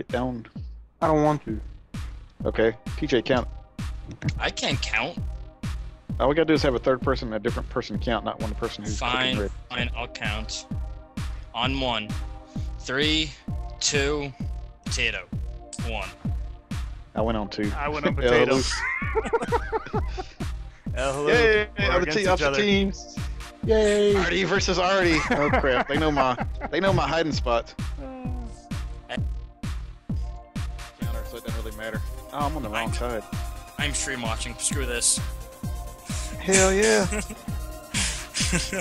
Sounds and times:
Speech: 0.0 - 1.6, 2.4 - 3.5, 4.1 - 5.2, 6.2 - 10.6, 11.6 - 12.1, 12.8 - 16.1, 17.2 - 18.8, 21.0 - 28.5, 31.0 - 35.2, 36.2 - 37.4, 38.0 - 38.8
Music: 0.0 - 38.8.

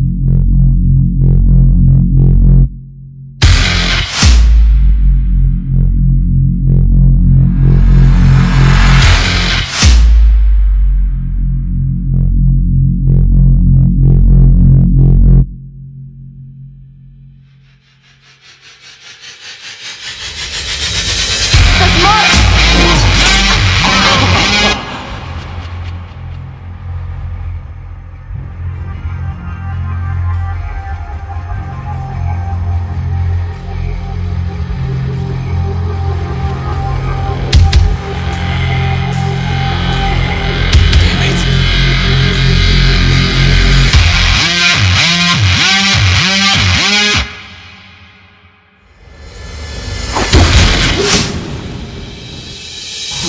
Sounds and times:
Music: 0.0 - 53.2
Speech: 21.6 - 25.2, 41.0 - 41.6.

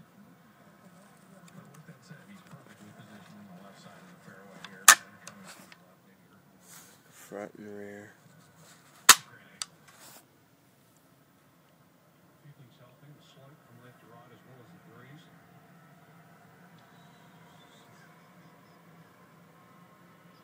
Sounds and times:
Speech: 0.8 - 9.8, 12.4 - 15.4.

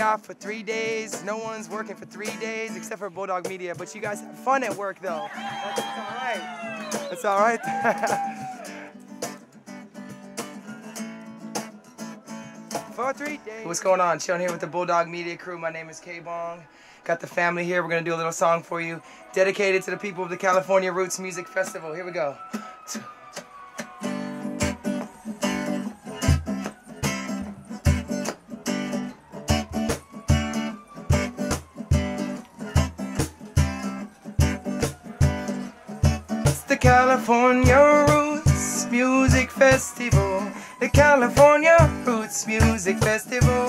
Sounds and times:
Music: 0.0 - 14.8, 18.8 - 43.6.

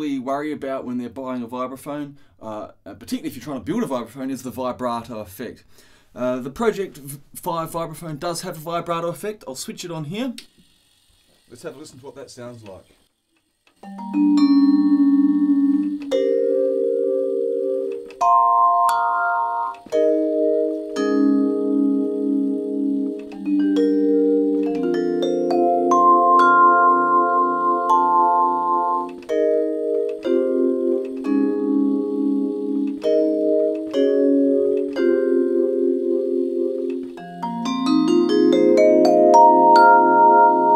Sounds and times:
Music: 13.8 - 40.7.

